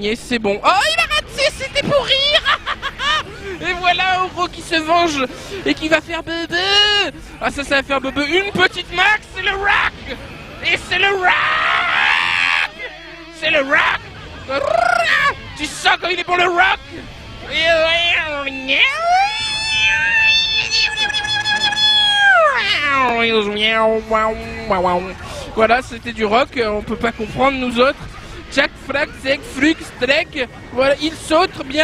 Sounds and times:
Speech: 0:00.0 - 0:02.6, 0:03.6 - 0:31.8.

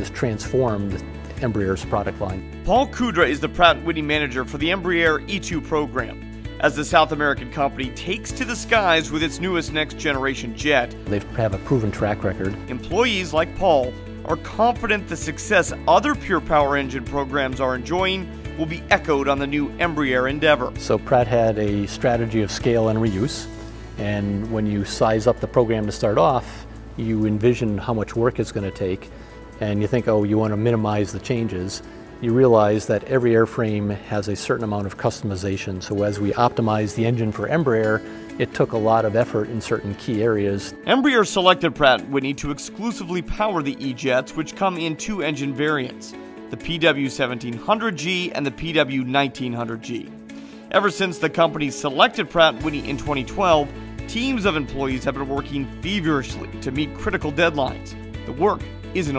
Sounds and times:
Speech: 0:00.0 - 0:50.1, 0:50.7 - 0:59.1
Music: 0:00.0 - 0:59.1.

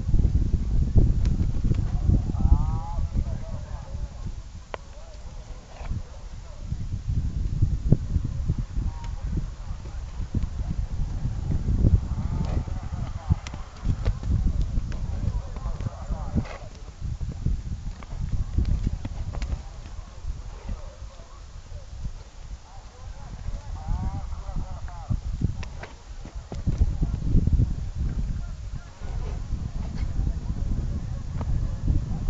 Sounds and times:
Clip-clop: 0:00.9 - 0:06.8, 0:07.9 - 0:32.2
Speech: 0:01.9 - 0:04.2, 0:12.4 - 0:14.1, 0:15.0 - 0:17.0, 0:22.6 - 0:25.2, 0:26.3 - 0:27.2, 0:28.2 - 0:31.0.

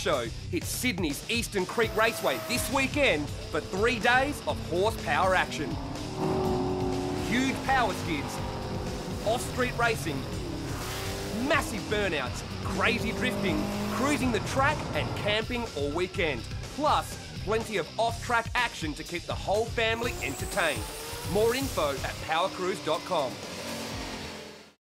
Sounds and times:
Speech: 0:00.0 - 0:05.7, 0:07.2 - 0:08.4, 0:09.2 - 0:10.2, 0:11.4 - 0:23.4
Music: 0:00.0 - 0:24.8.

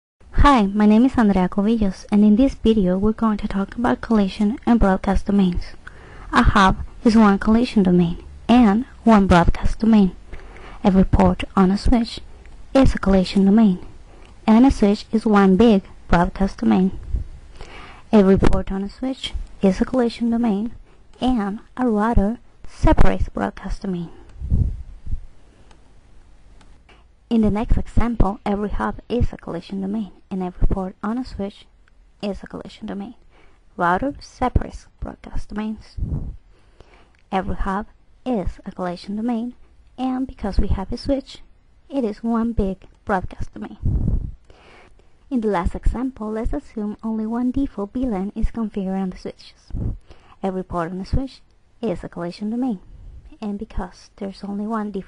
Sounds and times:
Speech: 0:00.3 - 0:10.2, 0:10.8 - 0:17.0, 0:18.1 - 0:24.2, 0:27.3 - 0:33.2, 0:33.8 - 0:36.2, 0:37.3 - 0:43.9, 0:45.3 - 0:55.0.

